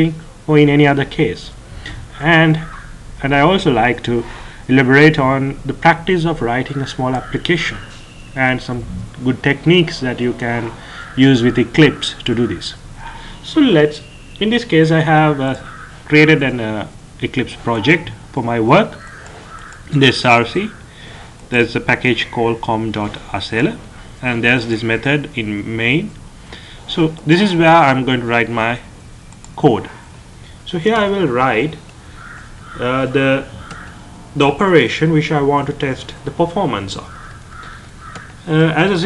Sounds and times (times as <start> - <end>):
Speech: 0.0 - 12.8, 13.4 - 19.0, 19.9 - 20.8, 21.5 - 26.2, 26.9 - 28.9, 29.6 - 30.0, 30.7 - 31.8, 32.8 - 33.6, 34.4 - 37.2, 38.4 - 39.0.